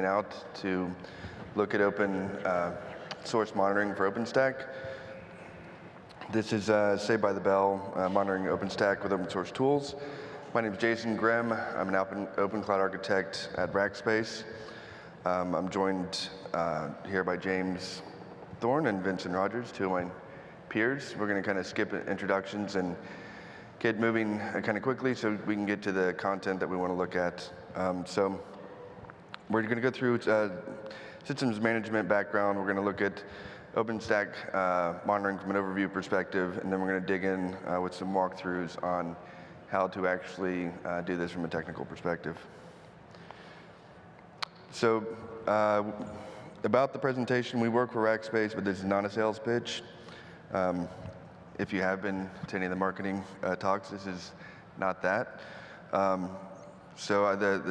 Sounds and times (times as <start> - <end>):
Speech: 0.0 - 14.6, 15.2 - 23.1, 23.8 - 42.5, 44.4 - 57.7.